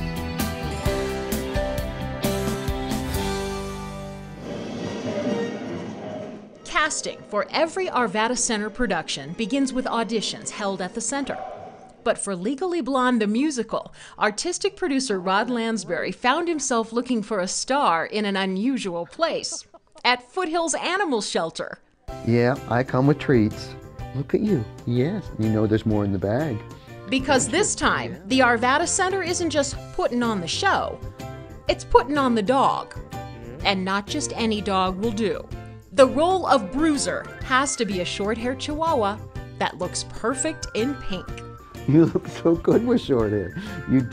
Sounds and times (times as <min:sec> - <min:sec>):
Music: 0:00.0 - 0:11.4, 0:22.1 - 0:44.1
Speech: 0:12.1 - 0:30.9, 0:31.7 - 0:35.4, 0:41.9 - 0:44.1.